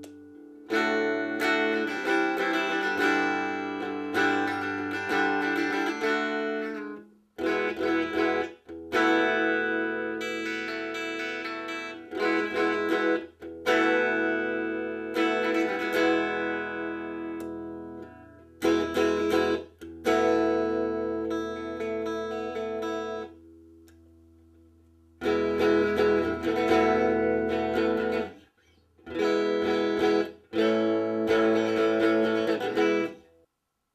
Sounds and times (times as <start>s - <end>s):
Electric guitar: 0.0s - 24.1s, 25.2s - 33.3s.